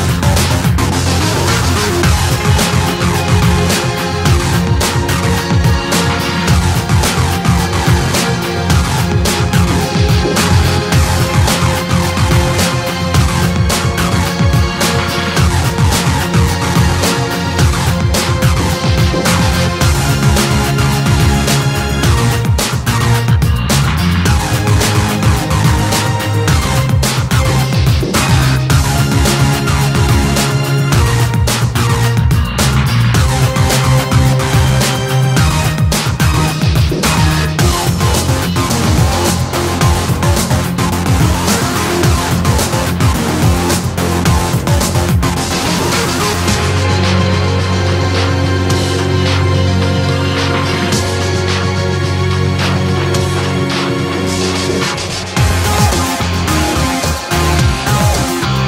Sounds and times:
Music: 0:00.0 - 0:58.6.

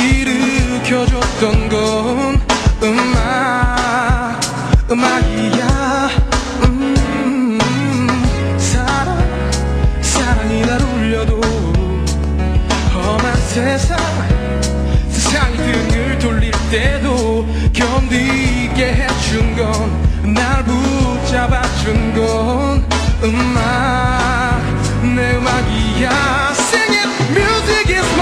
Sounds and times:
Music: 0:00.0 - 0:28.2.

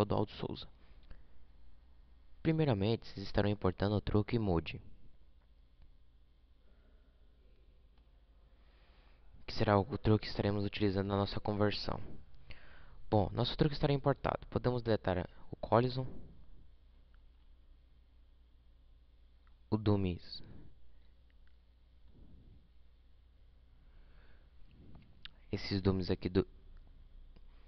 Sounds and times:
Speech: 0:00.0 - 0:00.8, 0:02.4 - 0:04.9, 0:09.4 - 0:12.2, 0:13.1 - 0:16.2, 0:19.7 - 0:20.6, 0:25.4 - 0:26.6.

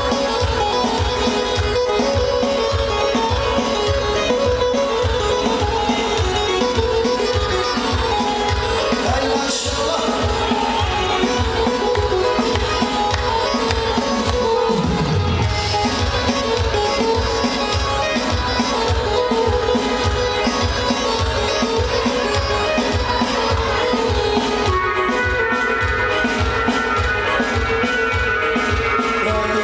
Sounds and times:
Music: 0:00.0 - 0:29.6
Male singing: 0:09.0 - 0:11.4, 0:27.3 - 0:29.6.

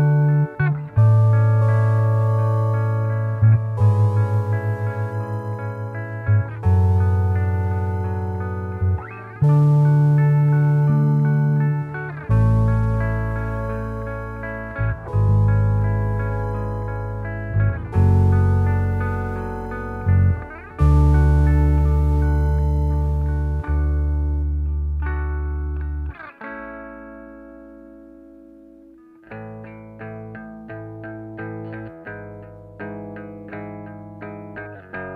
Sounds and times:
Music: 0:00.0 - 0:35.1.

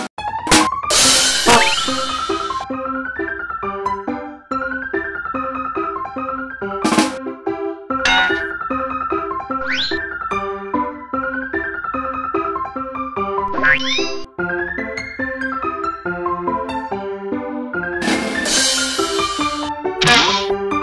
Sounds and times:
Music: 0:00.0 - 0:20.8.

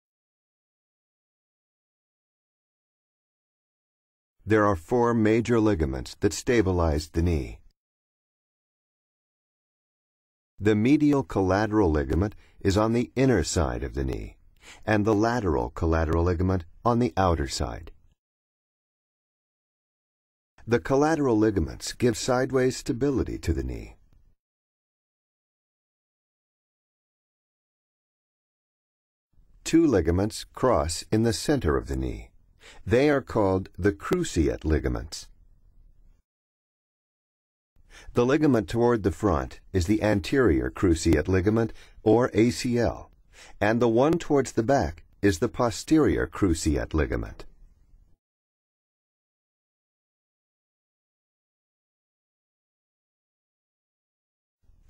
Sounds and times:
Speech: 0:04.4 - 0:07.7, 0:10.6 - 0:18.0, 0:20.6 - 0:24.0, 0:29.6 - 0:35.3, 0:38.1 - 0:47.5.

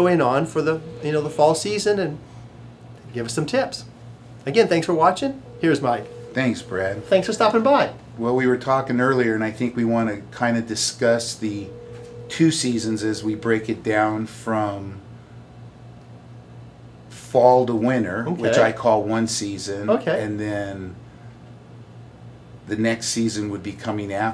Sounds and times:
Speech: 0:00.0 - 0:02.2, 0:03.0 - 0:11.7, 0:12.3 - 0:15.0, 0:17.2 - 0:21.0, 0:22.7 - 0:24.3.

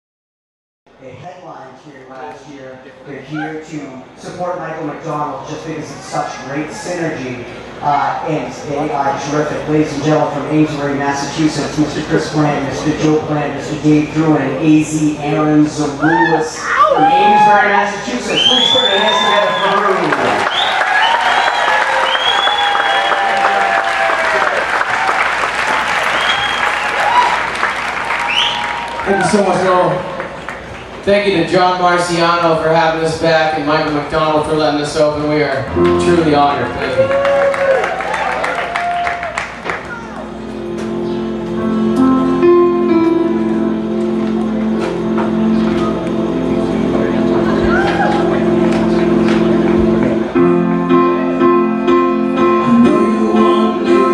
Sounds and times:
Speech: 0:01.0 - 0:20.4, 0:29.1 - 0:30.1, 0:31.0 - 0:37.1.

